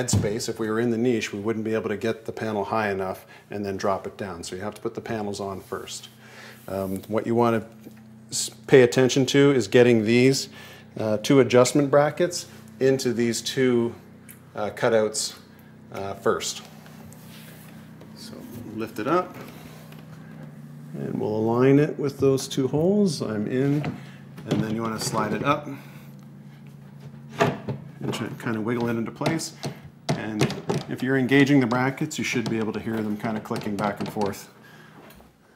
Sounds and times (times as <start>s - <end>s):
Speech: 0.0s - 7.7s, 8.3s - 16.7s, 18.2s - 19.4s, 20.9s - 25.8s, 28.0s - 34.6s.